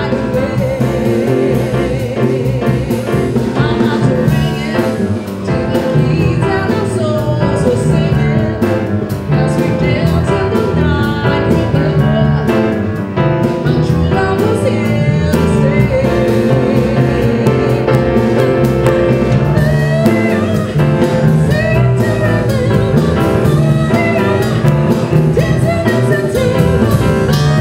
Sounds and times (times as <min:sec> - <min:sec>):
Music: 0:00.0 - 0:27.6.